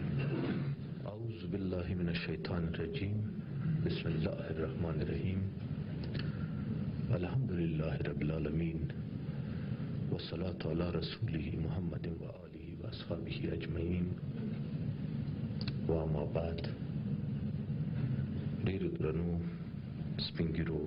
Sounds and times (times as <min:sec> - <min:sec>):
Narration, monologue: 0:00.0 - 0:20.8
Male speech, man speaking: 0:01.0 - 0:05.6, 0:07.1 - 0:09.0, 0:10.1 - 0:14.2, 0:15.8 - 0:16.8, 0:18.6 - 0:19.6, 0:20.2 - 0:20.8.